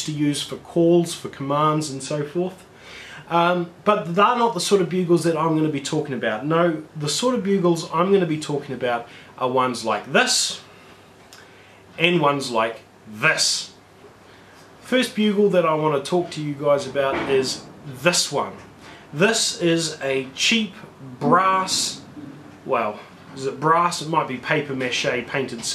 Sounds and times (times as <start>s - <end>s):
Speech: 0.0s - 10.7s, 12.0s - 13.8s, 14.8s - 25.7s.